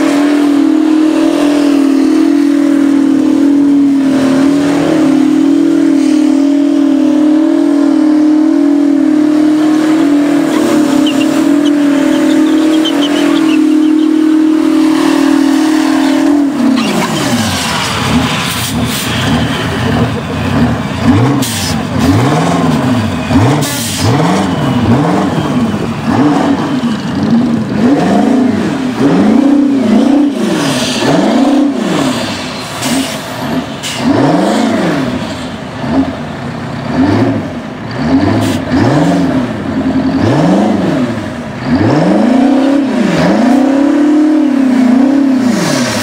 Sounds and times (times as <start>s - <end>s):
Accelerating, revving, vroom: 0.0s - 36.2s, 36.8s - 46.0s
Truck: 0.0s - 46.0s
Tire squeal: 9.4s - 28.2s.